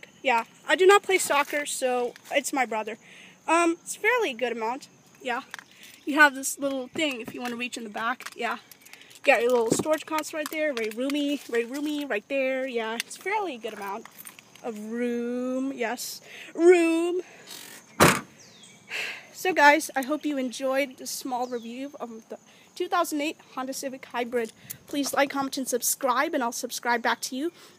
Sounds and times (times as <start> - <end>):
Door: 18.0 - 18.3.